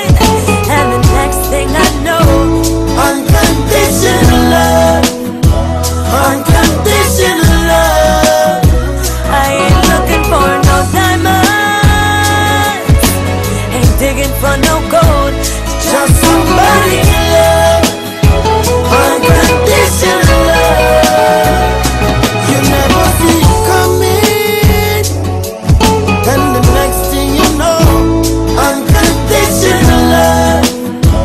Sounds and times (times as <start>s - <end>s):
Music of Africa: 0.0s - 31.2s.